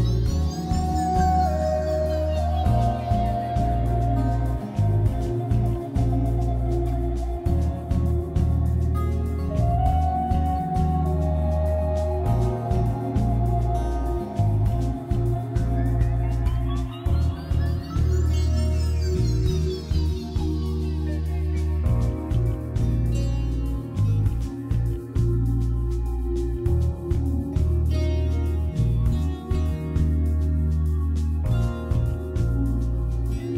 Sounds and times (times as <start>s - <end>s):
Music: 0.0s - 33.5s.